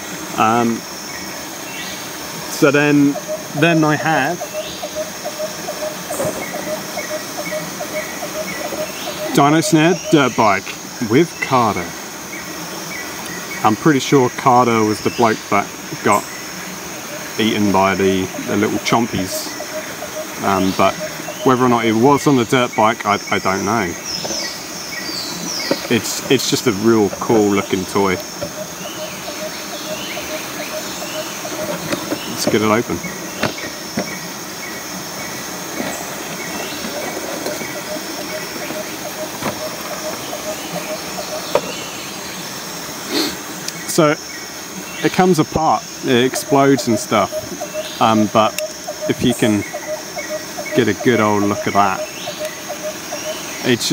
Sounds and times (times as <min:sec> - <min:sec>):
Speech: 0:00.4 - 0:00.8, 0:02.6 - 0:04.4, 0:09.3 - 0:11.9, 0:13.6 - 0:16.2, 0:17.4 - 0:19.6, 0:20.4 - 0:24.0, 0:25.9 - 0:28.2, 0:32.3 - 0:33.0, 0:43.9 - 0:44.2, 0:45.0 - 0:47.4, 0:48.0 - 0:49.7, 0:50.7 - 0:52.1, 0:53.6 - 0:53.9.